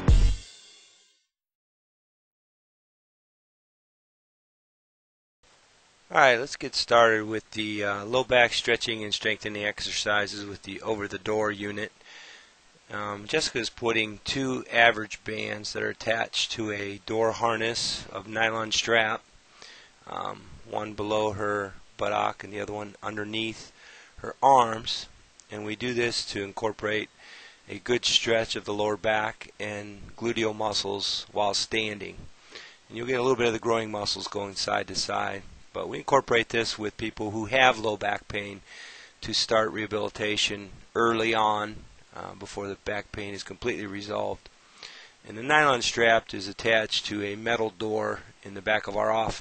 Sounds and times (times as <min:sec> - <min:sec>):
Speech: 0:06.1 - 0:12.0, 0:12.9 - 0:19.2, 0:20.1 - 0:27.1, 0:27.7 - 0:32.3, 0:32.9 - 0:38.6, 0:39.2 - 0:44.5, 0:45.3 - 0:49.4.